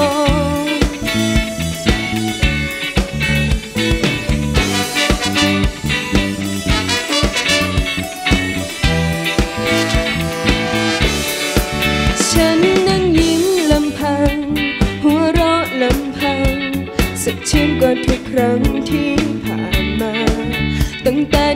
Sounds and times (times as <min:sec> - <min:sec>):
Pop music: 0:00.0 - 0:21.5.